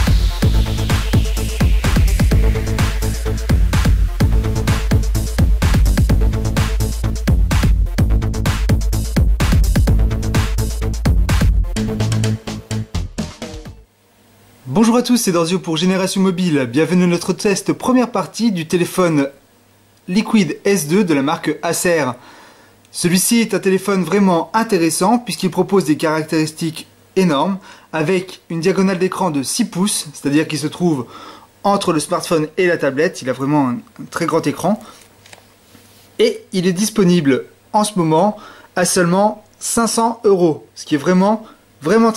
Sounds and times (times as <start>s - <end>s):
Speech: 14.6s - 19.4s, 20.1s - 22.2s, 22.9s - 34.9s, 36.2s - 42.1s.